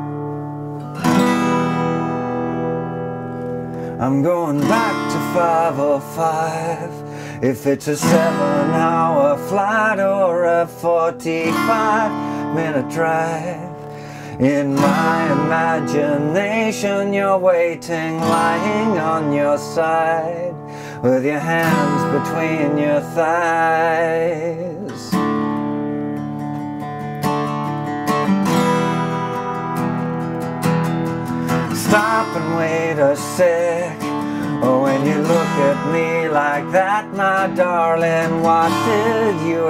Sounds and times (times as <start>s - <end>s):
Strum: 0.0s - 39.6s.